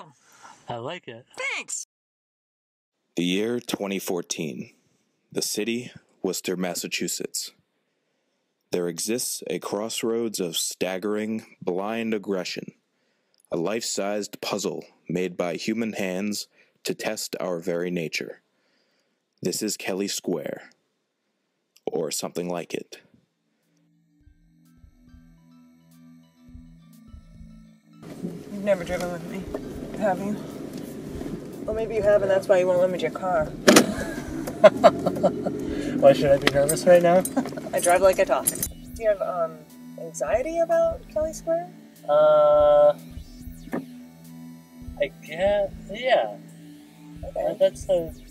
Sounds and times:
Speech: 0.0 - 1.9, 3.2 - 4.7, 5.3 - 7.6, 8.8 - 12.8, 13.5 - 18.4, 19.4 - 20.7, 21.8 - 23.0, 31.7 - 33.5, 36.0 - 43.0, 45.0 - 46.4, 47.3 - 48.2
Music: 23.4 - 48.3
Laughter: 33.8 - 35.6.

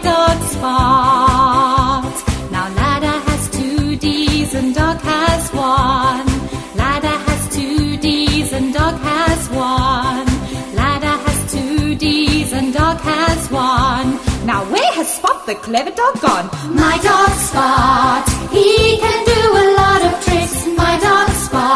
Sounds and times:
Music: 0.0 - 21.7.

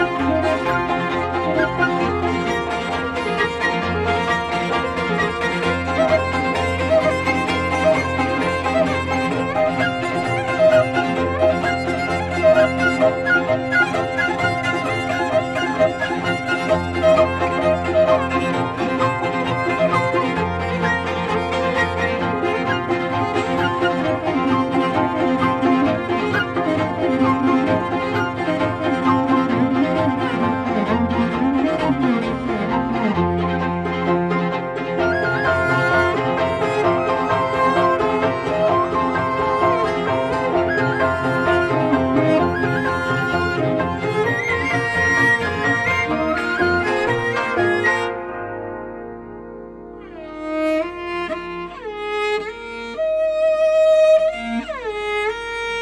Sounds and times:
Violin, fiddle: 0.0 - 48.8, 50.0 - 55.8.

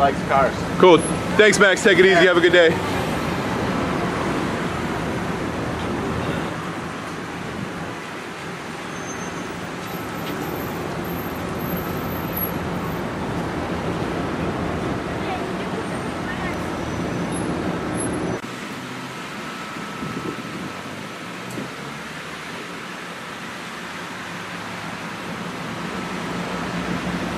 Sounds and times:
Car: 0.0 - 27.3
Outside, urban or manmade: 0.0 - 27.3.

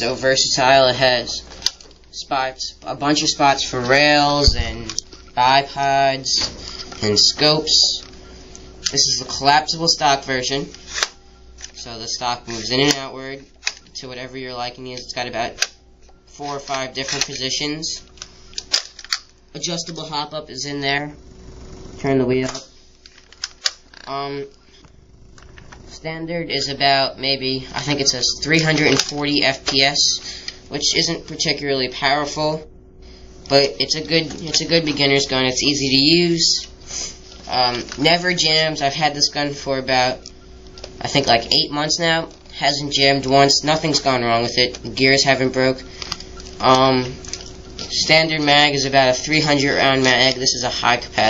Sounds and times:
Speech: 19.6 - 21.2, 25.9 - 32.7, 33.5 - 36.7, 37.5 - 40.2, 41.0 - 45.9, 46.6 - 47.2, 47.9 - 51.2.

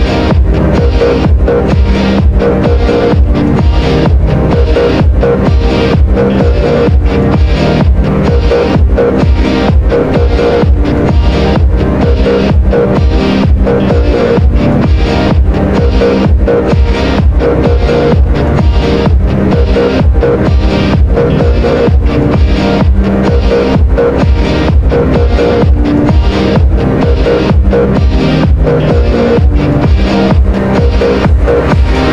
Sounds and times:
Music: 0.0 - 32.1.

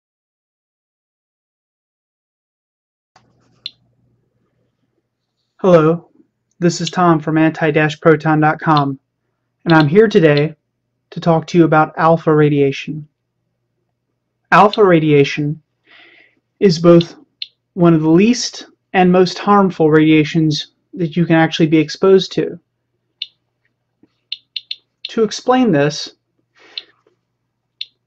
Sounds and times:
Speech: 5.6 - 9.0, 9.6 - 13.2, 14.5 - 15.6, 16.6 - 22.6, 25.1 - 26.2.

